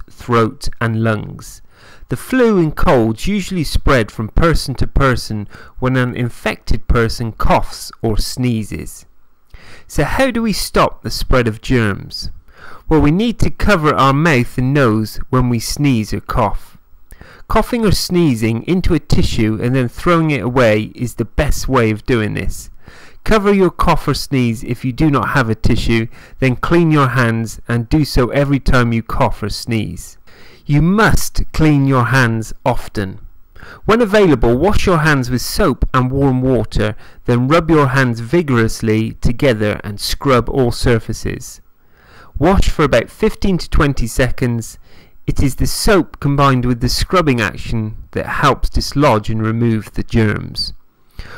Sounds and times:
Narration, monologue: 0.0 - 51.3.

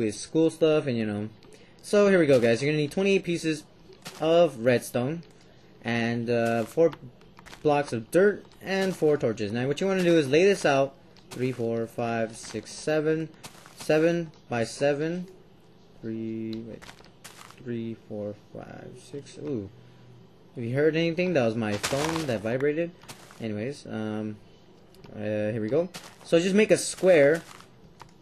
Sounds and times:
Speech: 0.0 - 16.8, 17.6 - 19.8, 20.6 - 27.5.

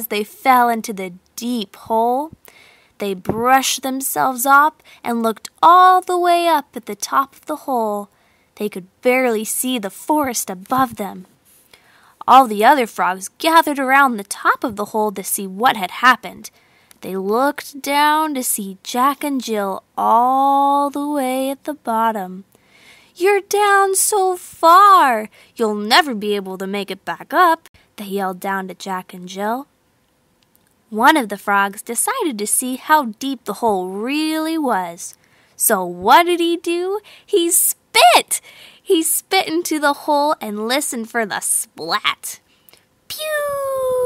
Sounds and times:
Speech: 0.0 - 2.4, 3.0 - 11.3, 12.2 - 22.4, 23.2 - 29.7, 30.9 - 42.4, 43.1 - 44.0.

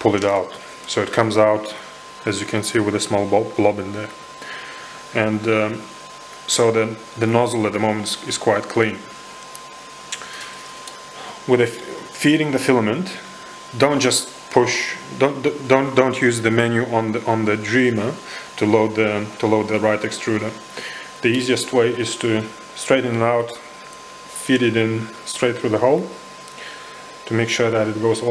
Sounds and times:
Speech: 0.0 - 4.2, 5.1 - 5.9, 6.5 - 9.1, 11.4 - 20.6, 21.2 - 23.7, 24.3 - 26.2, 27.2 - 28.3.

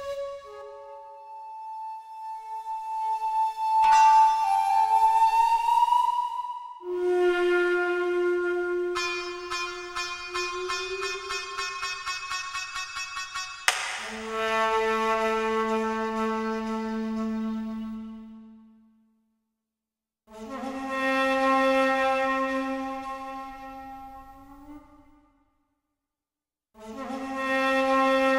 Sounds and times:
Flute: 0.0 - 18.8, 20.3 - 25.2, 26.8 - 28.3.

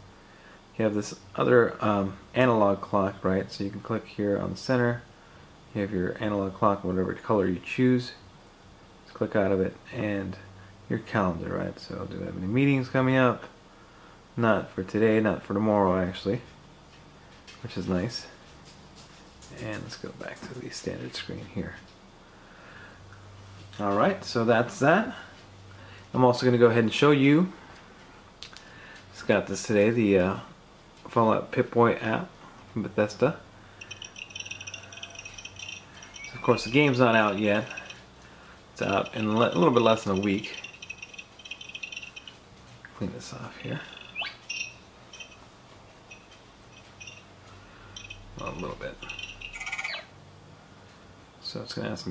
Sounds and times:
Speech: 0.8 - 5.1, 5.7 - 8.2, 9.1 - 13.6, 14.4 - 16.6, 17.6 - 18.4, 19.5 - 21.9, 23.8 - 25.4, 26.1 - 27.6, 29.1 - 33.4, 36.3 - 37.9, 38.8 - 40.6, 42.9 - 44.0, 48.4 - 49.1, 51.4 - 52.1.

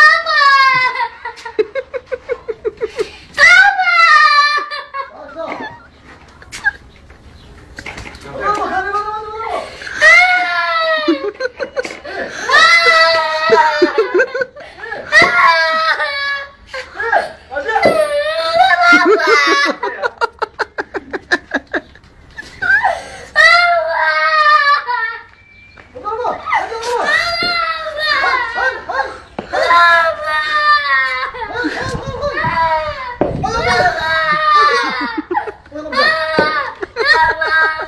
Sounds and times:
Belly laugh: 0.7 - 3.2, 4.4 - 6.9, 10.9 - 17.3, 18.6 - 23.1, 31.1 - 32.6, 33.5 - 37.8.

